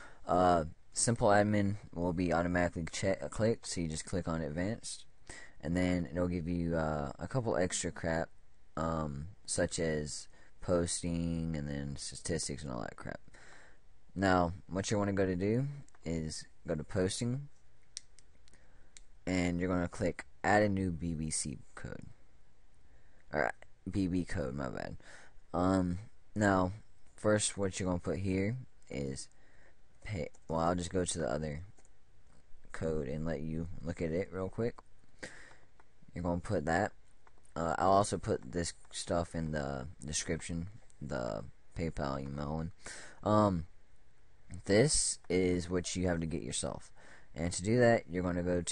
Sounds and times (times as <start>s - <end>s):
Speech: 0.2s - 13.2s, 14.1s - 17.6s, 19.2s - 22.2s, 23.3s - 29.4s, 30.0s - 31.8s, 32.7s - 34.9s, 36.1s - 37.0s, 37.6s - 43.7s, 44.5s - 48.7s.